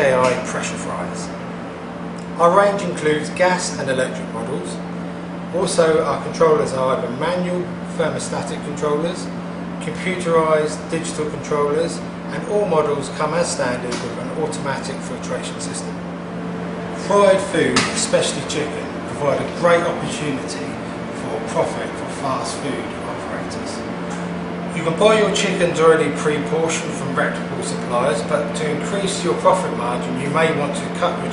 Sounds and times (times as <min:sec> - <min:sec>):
Speech: 0:00.0 - 0:01.4, 0:02.2 - 0:04.9, 0:05.5 - 0:16.0, 0:17.0 - 0:23.9, 0:24.7 - 0:31.3.